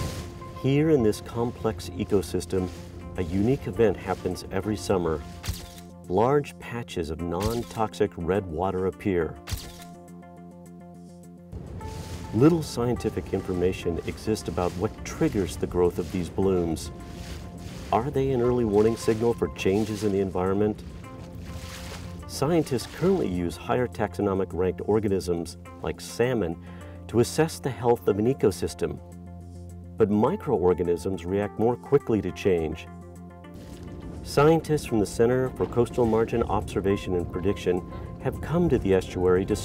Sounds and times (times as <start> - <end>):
Music: 0.0 - 39.6
Speech: 0.6 - 5.2, 6.1 - 9.4, 12.3 - 17.0, 17.9 - 20.8, 22.3 - 29.0, 30.0 - 32.9, 34.2 - 39.6.